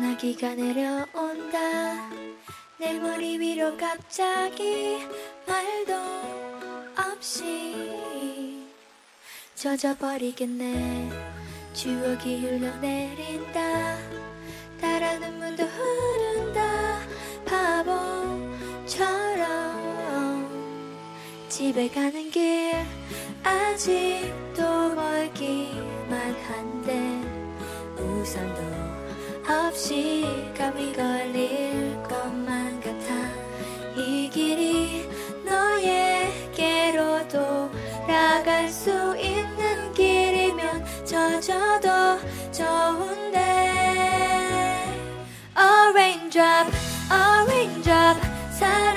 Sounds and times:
Music: 0.0s - 48.9s.

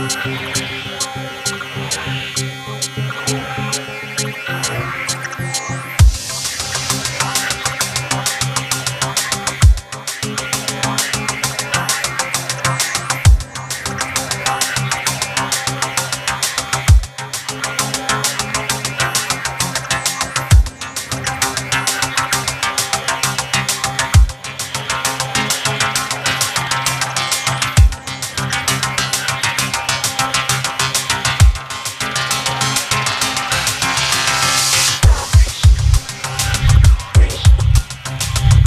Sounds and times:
Dubstep: 0.0s - 38.6s.

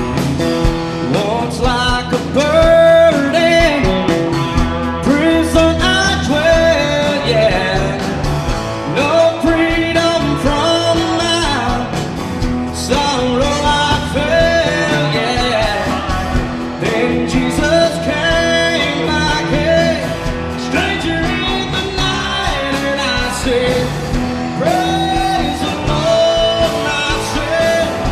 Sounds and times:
Blues: 0.0s - 28.1s.

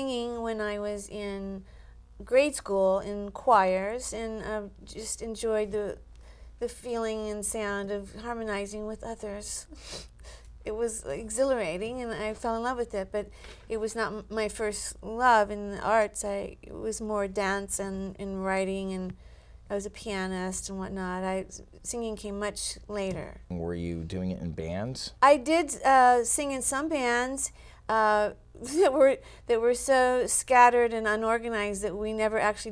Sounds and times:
Speech: 19.7s - 32.7s.

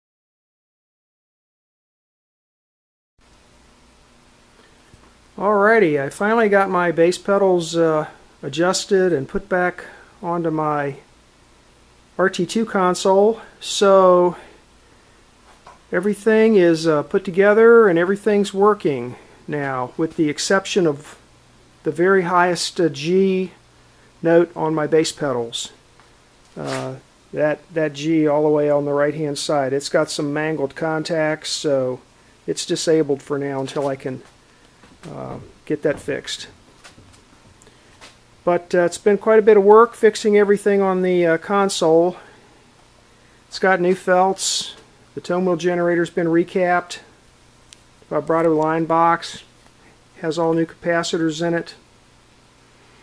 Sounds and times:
Speech: 5.4s - 11.1s, 12.2s - 14.6s, 15.9s - 21.2s, 21.8s - 23.6s, 24.2s - 25.8s, 26.6s - 34.3s, 35.0s - 36.6s, 38.4s - 42.4s, 43.5s - 47.2s, 48.1s - 49.5s, 50.2s - 51.9s.

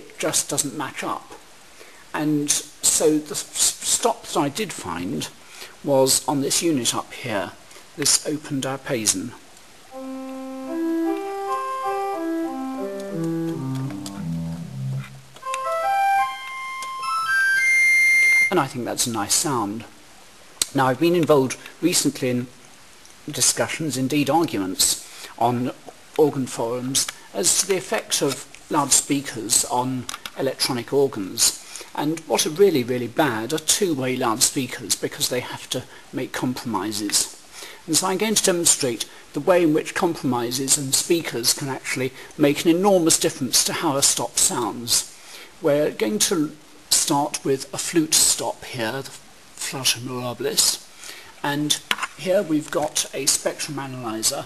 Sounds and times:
Electronic organ: 10.0s - 18.6s.

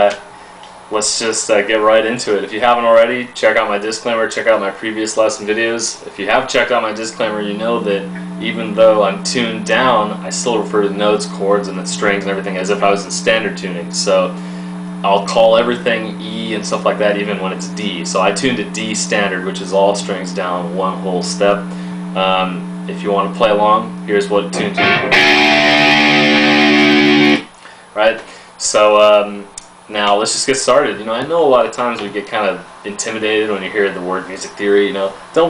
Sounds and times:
Speech: 0.0s - 0.3s, 0.9s - 14.4s, 15.0s - 25.2s, 28.0s - 35.5s.

